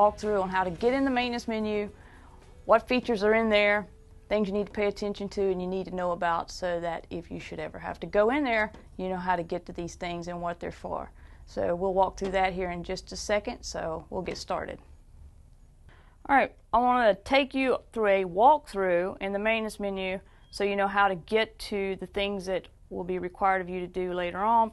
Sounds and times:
Speech: 0.0 - 1.9, 2.7 - 14.8, 16.3 - 24.7.

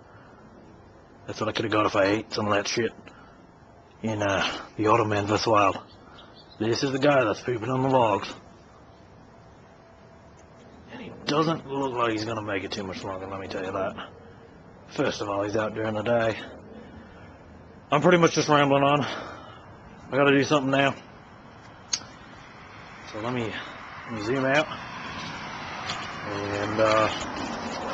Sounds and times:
Outside, urban or manmade: 0.0 - 27.9
Speech: 1.3 - 3.0, 4.0 - 5.8, 6.6 - 8.4, 10.9 - 14.1, 14.9 - 16.5, 17.9 - 19.2, 20.1 - 21.0, 23.1 - 24.8, 26.2 - 27.2.

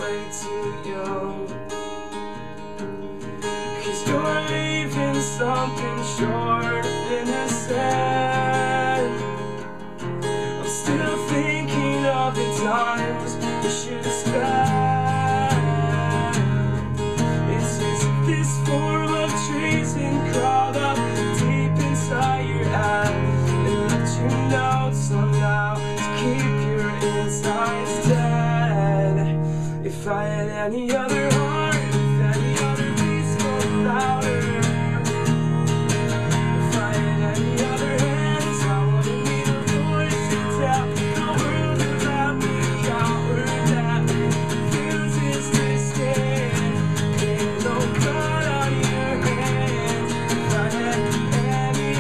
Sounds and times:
Music: 0.0 - 52.0.

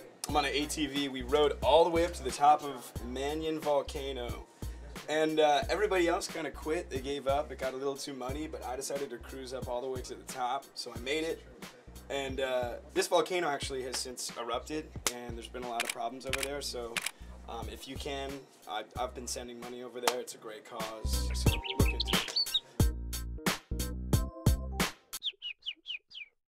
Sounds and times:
Speech: 0.0 - 22.1
Music: 0.0 - 25.2
Chirp, tweet: 21.3 - 22.7, 25.2 - 26.4.

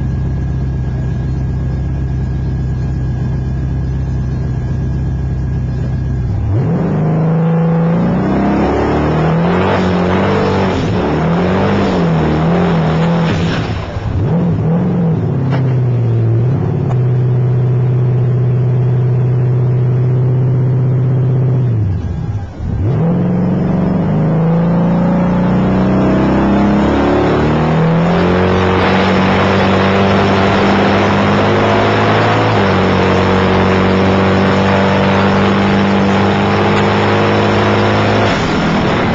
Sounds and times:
Car: 0.0 - 39.1.

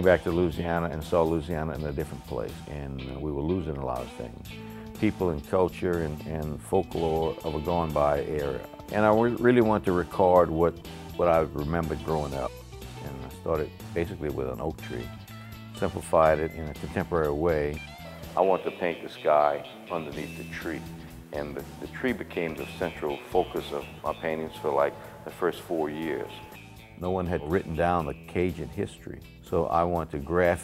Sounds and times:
Speech: 0.0 - 15.1, 15.8 - 17.8, 18.4 - 30.6
Music: 0.0 - 30.6.

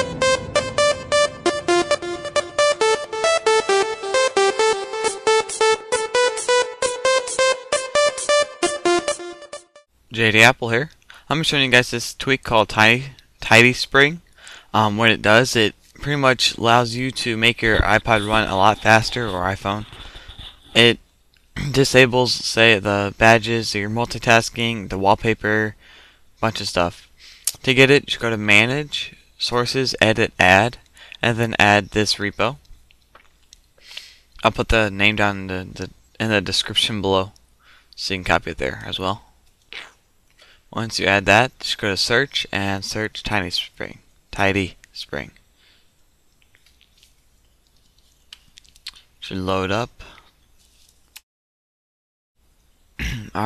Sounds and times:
Speech: 10.1 - 20.0, 20.7 - 21.0, 21.6 - 25.8, 26.4 - 32.6, 34.4 - 37.4, 38.0 - 39.9, 40.7 - 45.4, 49.2 - 50.2, 53.0 - 53.4.

